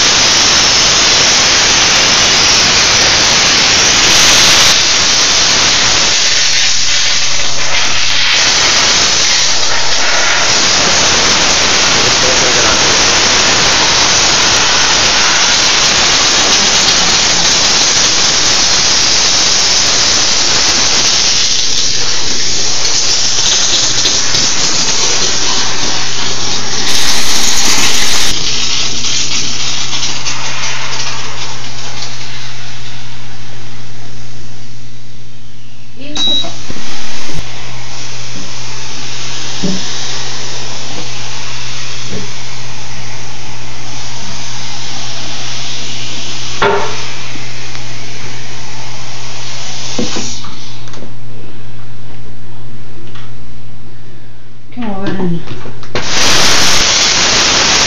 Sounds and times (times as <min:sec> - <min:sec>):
Hiss: 0:00.0 - 0:33.2, 0:36.7 - 0:50.9, 0:56.0 - 0:57.8.